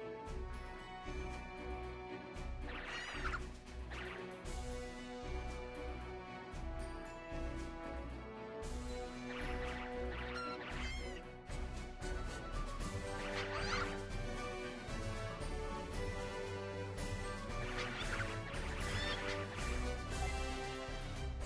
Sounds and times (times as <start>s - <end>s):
Music: 0.0s - 21.4s.